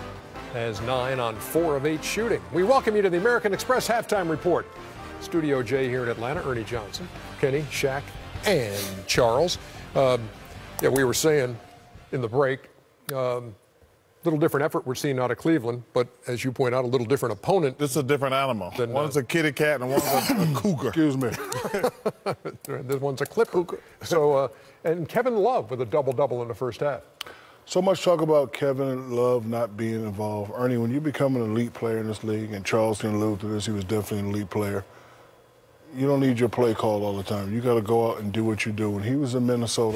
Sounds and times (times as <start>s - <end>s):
Music: 0.0s - 12.3s.